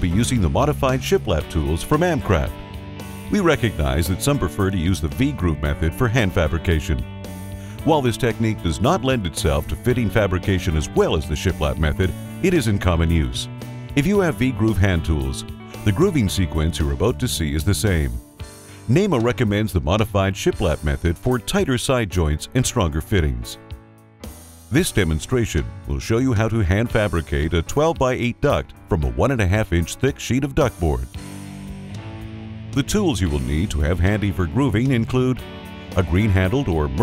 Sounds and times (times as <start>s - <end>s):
Speech: 0.0s - 2.6s, 3.3s - 7.1s, 7.8s - 18.2s, 18.9s - 23.6s, 24.7s - 31.2s, 32.8s - 35.4s, 36.0s - 37.0s
Music: 0.0s - 37.0s.